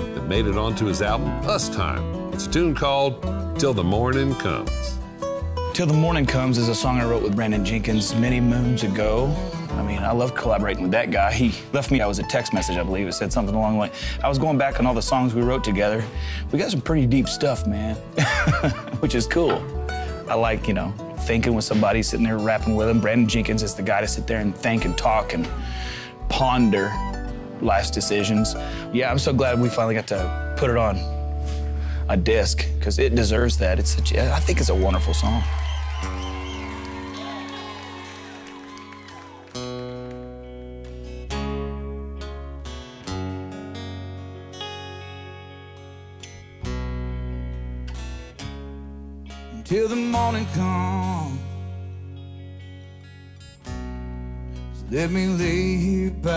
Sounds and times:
Music: 0.0s - 56.3s
Speech: 0.2s - 5.0s, 5.8s - 18.0s, 19.0s - 19.7s, 20.3s - 25.5s, 26.2s - 27.0s, 27.6s - 31.1s, 32.1s - 35.5s.

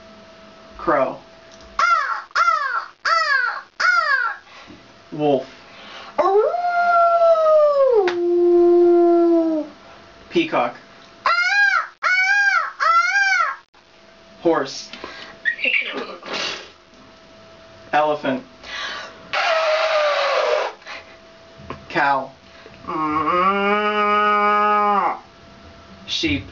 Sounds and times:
Speech: 0.8s - 1.3s, 5.1s - 5.5s, 10.3s - 10.8s, 14.4s - 14.9s, 17.9s - 18.5s, 21.9s - 23.4s, 26.1s - 26.5s.

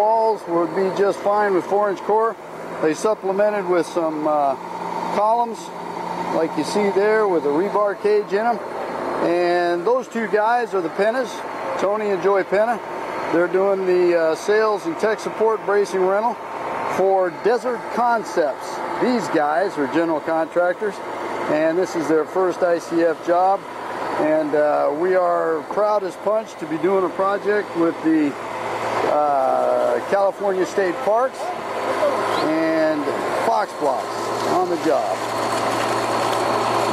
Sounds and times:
Speech: 0.0s - 5.7s, 6.3s - 8.6s, 9.2s - 23.6s, 24.2s - 28.4s, 29.1s - 35.2s.

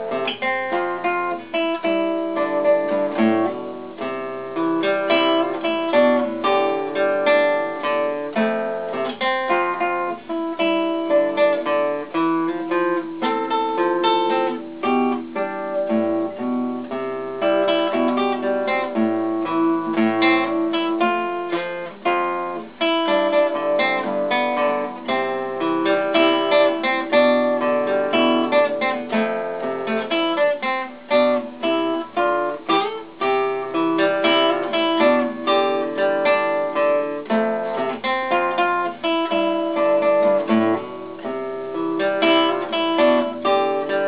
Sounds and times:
Acoustic guitar: 0.0s - 44.0s.

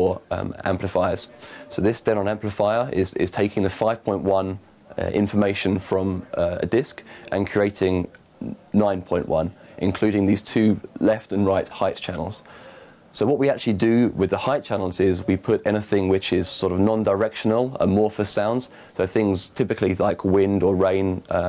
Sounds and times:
Speech: 0.0s - 12.5s, 13.1s - 21.4s.

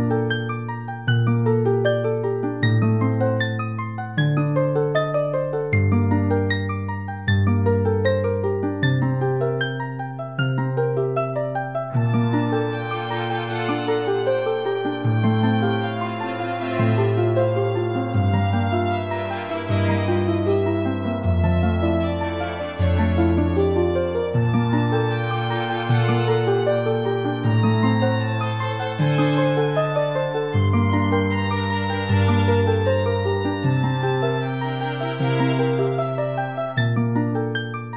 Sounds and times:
Music: 0.0s - 37.9s.

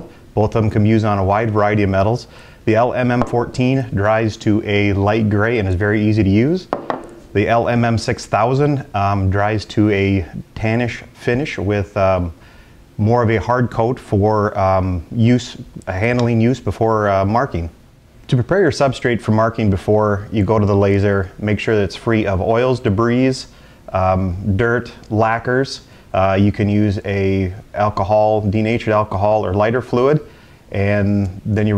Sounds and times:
Speech: 0.0s - 6.7s, 7.3s - 12.4s, 13.0s - 31.7s.

